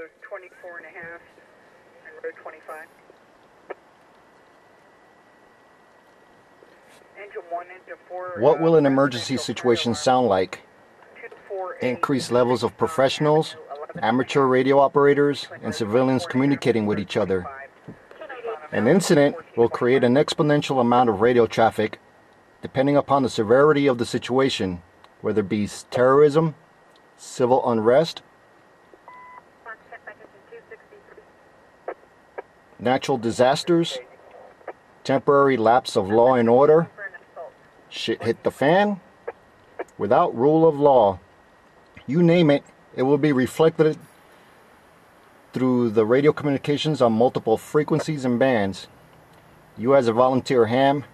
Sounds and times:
Speech: 0:00.0 - 0:01.3, 0:02.0 - 0:02.9, 0:07.2 - 0:10.6, 0:11.2 - 0:22.0, 0:22.6 - 0:26.6, 0:27.2 - 0:28.2, 0:32.8 - 0:34.2, 0:35.1 - 0:39.0, 0:40.0 - 0:41.2, 0:42.0 - 0:44.0, 0:45.6 - 0:48.9, 0:49.8 - 0:51.1
Radio: 0:00.0 - 0:03.0, 0:06.9 - 0:22.0, 0:22.6 - 0:26.6, 0:29.7 - 0:41.2, 0:42.0 - 0:44.2, 0:45.5 - 0:48.9, 0:49.8 - 0:51.1.

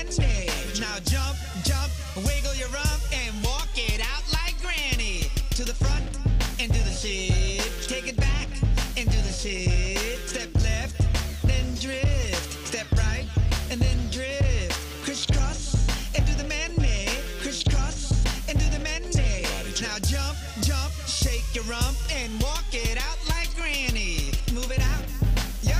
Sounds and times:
Music: 0:00.0 - 0:25.7.

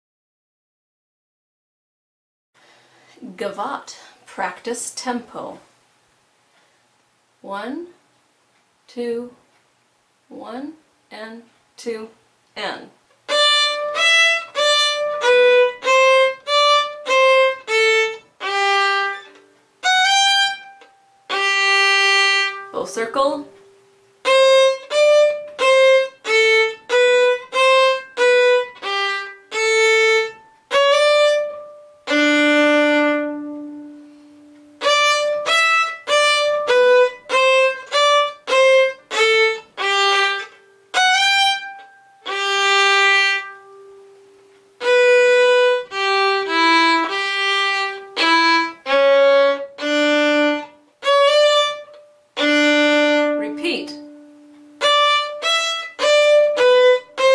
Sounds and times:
Violin, fiddle: 0:13.3 - 0:22.7, 0:24.2 - 0:43.8, 0:44.8 - 0:57.3.

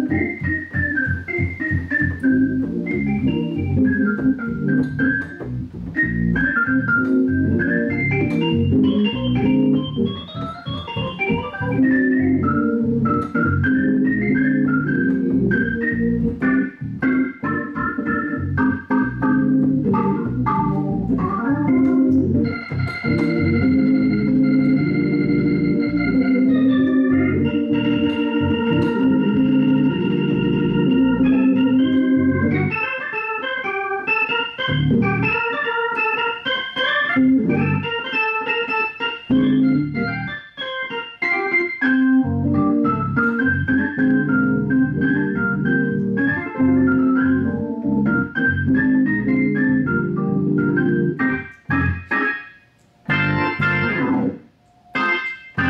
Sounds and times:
Hammond organ: 0:00.0 - 0:55.7.

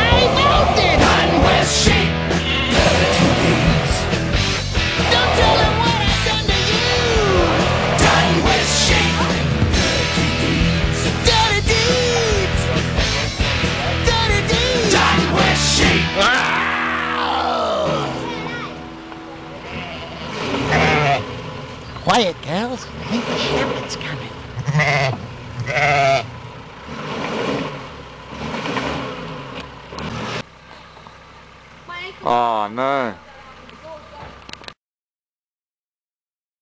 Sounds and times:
Car: 0:00.0 - 0:34.8
Outside, rural or natural: 0:16.2 - 0:34.8.

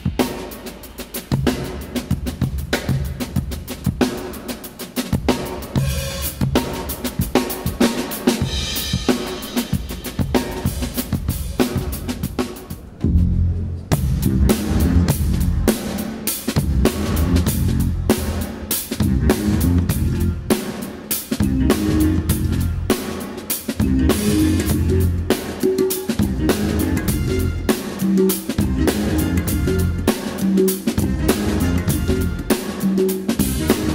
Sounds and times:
Drum kit: 0:00.0 - 0:33.9
Bass drum: 0:13.0 - 0:15.7, 0:16.6 - 0:18.4, 0:19.0 - 0:20.4, 0:21.4 - 0:22.9, 0:23.8 - 0:25.3, 0:26.2 - 0:27.7, 0:28.6 - 0:30.1, 0:31.0 - 0:32.5.

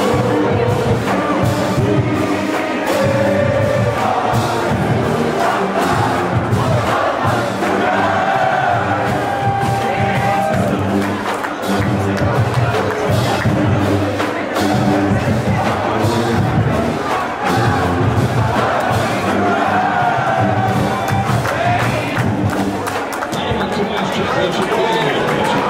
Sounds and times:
Crowd: 0:00.0 - 0:25.7.

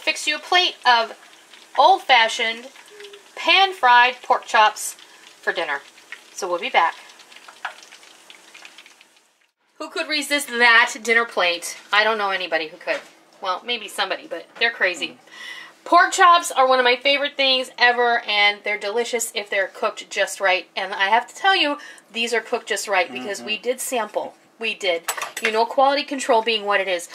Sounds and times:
Frying (food): 0:00.0 - 0:09.6.

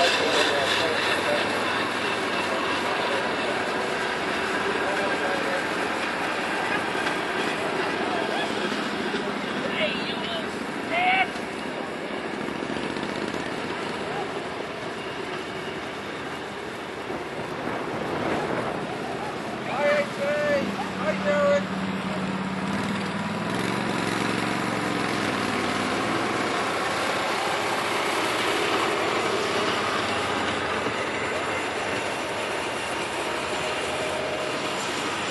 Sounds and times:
Speech: 0:00.0 - 0:01.6, 0:07.7 - 0:11.3, 0:19.7 - 0:21.7.

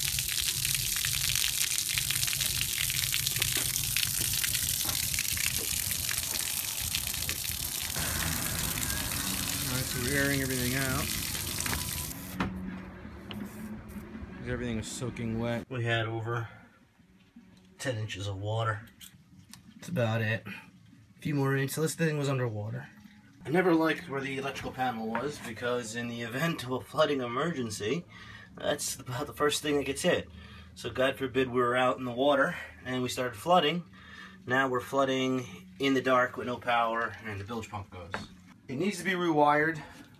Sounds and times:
Speech: 0:09.7 - 0:11.1, 0:14.4 - 0:16.6, 0:17.8 - 0:18.9, 0:23.5 - 0:28.0, 0:34.5 - 0:39.9.

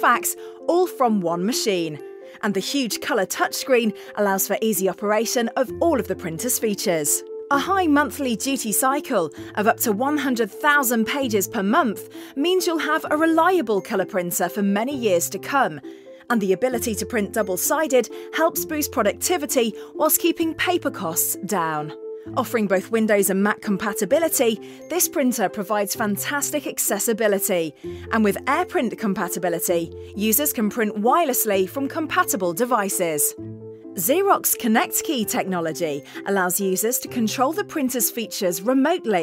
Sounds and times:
Speech: 0:00.0 - 0:33.4, 0:34.0 - 0:39.2
Music: 0:00.0 - 0:39.2.

